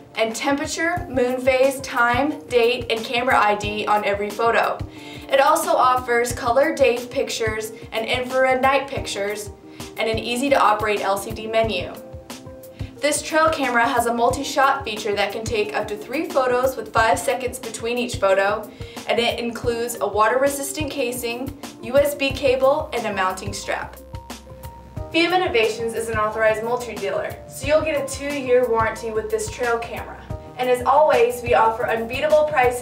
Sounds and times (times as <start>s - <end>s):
Music: 0.0s - 32.8s
Speech: 0.2s - 12.0s, 13.0s - 24.0s, 25.2s - 32.8s.